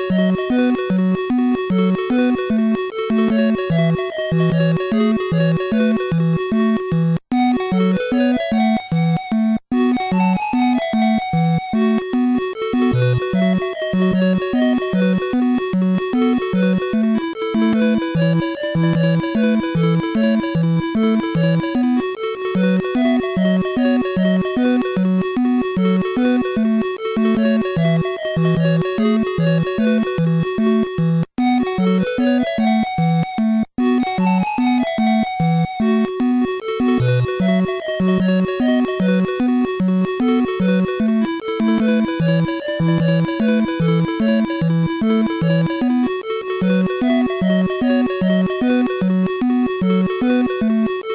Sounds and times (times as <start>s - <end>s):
Music: 0.0s - 51.1s.